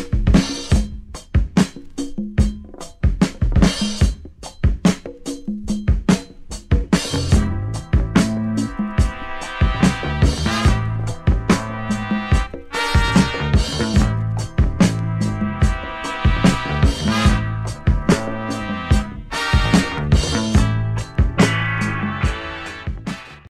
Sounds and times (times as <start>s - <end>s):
Drum kit: 0.0s - 23.4s.